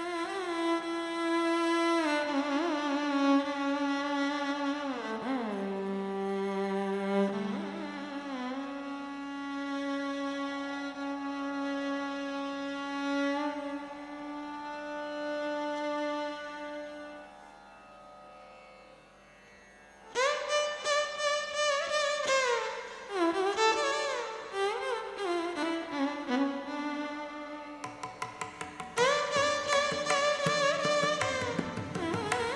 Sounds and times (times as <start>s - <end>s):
Music: 0.0s - 32.5s.